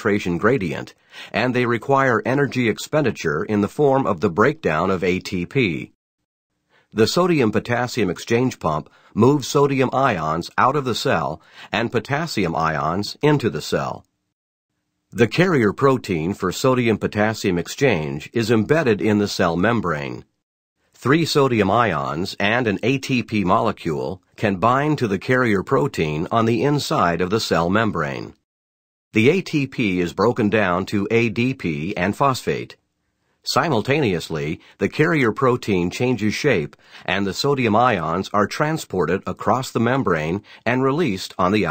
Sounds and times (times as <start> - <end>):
Speech: 0.0 - 6.0, 7.0 - 14.1, 15.2 - 20.3, 21.0 - 28.4, 29.2 - 32.8, 33.4 - 41.7.